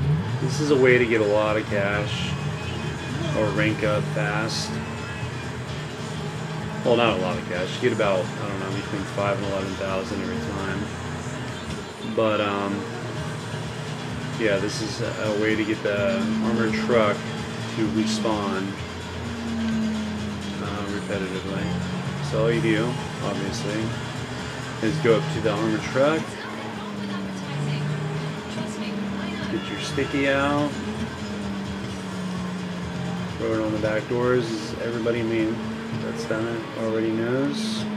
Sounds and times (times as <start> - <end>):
Car: 0.0 - 37.9
Music: 0.0 - 37.9
Speech: 0.4 - 2.4, 3.0 - 5.0, 6.8 - 10.9, 12.0 - 12.9, 14.3 - 18.8, 20.5 - 24.0, 24.8 - 30.8, 33.4 - 37.9.